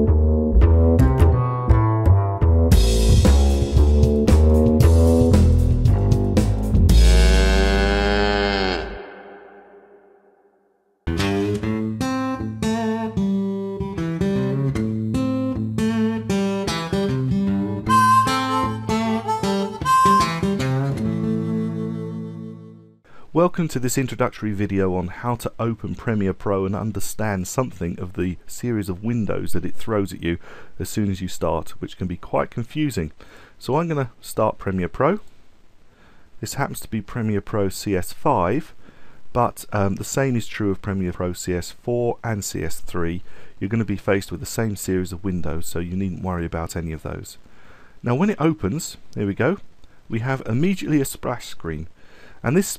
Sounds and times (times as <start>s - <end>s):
Speech: 23.3s - 35.2s, 36.4s - 47.4s, 48.0s - 52.7s.